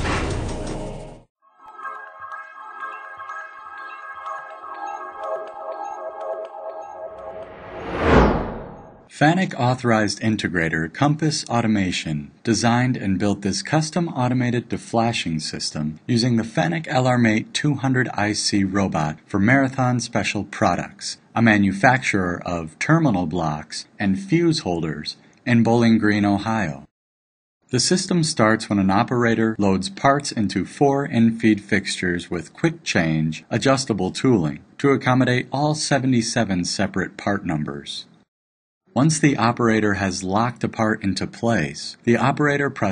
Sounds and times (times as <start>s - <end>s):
Speech: 9.1s - 26.9s, 27.7s - 38.2s, 39.0s - 42.9s.